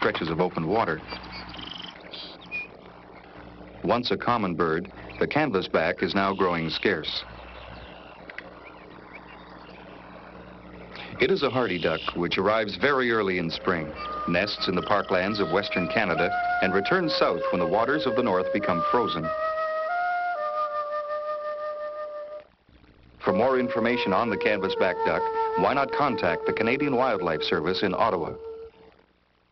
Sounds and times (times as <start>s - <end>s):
Speech: 0.0s - 1.0s, 3.8s - 7.3s, 11.2s - 19.3s, 23.2s - 28.4s.